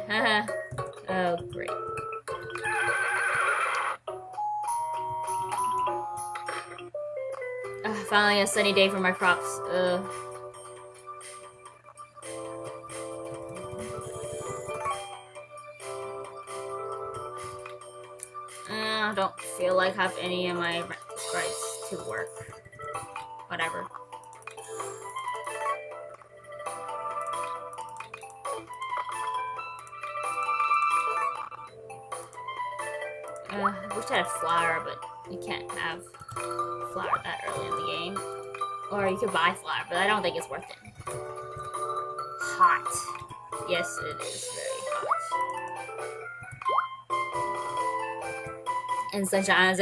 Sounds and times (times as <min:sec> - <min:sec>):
Music: 0:00.0 - 0:49.8
Speech: 0:00.1 - 0:00.5, 0:01.1 - 0:01.8, 0:07.9 - 0:10.1, 0:18.7 - 0:22.3, 0:23.5 - 0:23.9, 0:33.5 - 0:36.0, 0:36.9 - 0:38.2, 0:38.9 - 0:40.8, 0:42.4 - 0:45.0, 0:49.1 - 0:49.8.